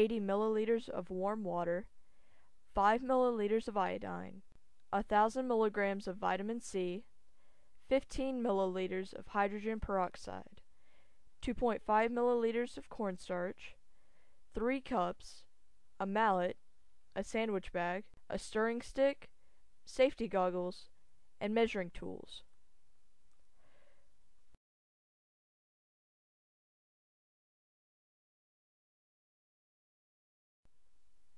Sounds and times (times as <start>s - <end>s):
Speech: 0.0s - 1.9s, 2.7s - 4.4s, 5.0s - 7.1s, 7.8s - 10.6s, 11.4s - 13.8s, 14.5s - 16.6s, 17.2s - 19.3s, 19.9s - 22.5s.